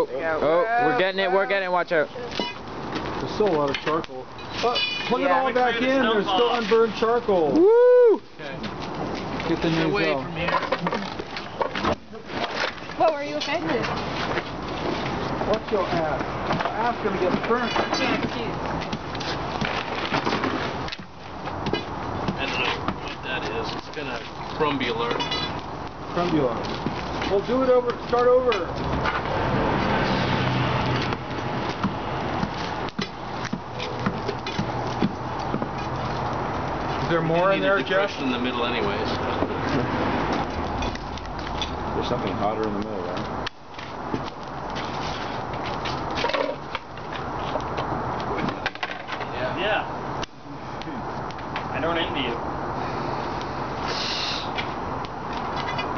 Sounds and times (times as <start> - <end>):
Fire: 0.0 - 55.9.